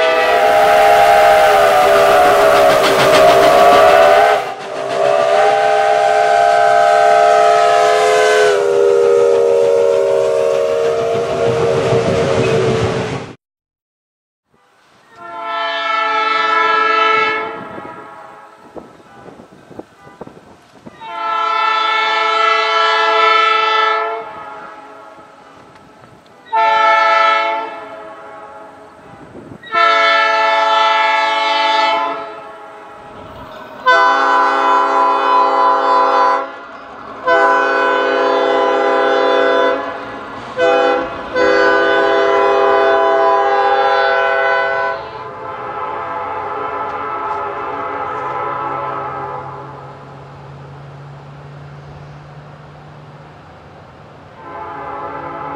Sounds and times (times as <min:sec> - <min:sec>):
Steam whistle: 0:00.0 - 0:13.1, 0:14.6 - 0:19.4, 0:21.0 - 0:25.5, 0:26.4 - 0:36.6, 0:37.2 - 0:50.0, 0:54.4 - 0:55.5
Train whistle: 0:00.0 - 0:13.1, 0:14.5 - 0:25.6, 0:26.4 - 0:50.2, 0:54.4 - 0:55.5
Railroad car, train wagon: 0:00.0 - 0:13.4, 0:14.4 - 0:55.5
Hiss: 0:00.2 - 0:11.4
Clickety-clack: 0:02.3 - 0:05.4.